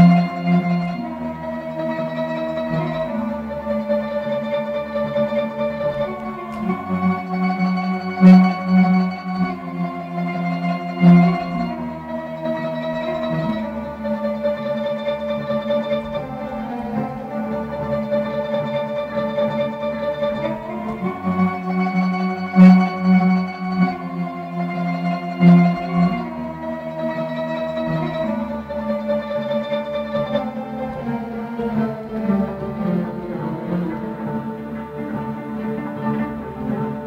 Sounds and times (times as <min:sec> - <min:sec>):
Inside, small room: 0:00.0 - 0:37.0
Music: 0:00.0 - 0:37.0.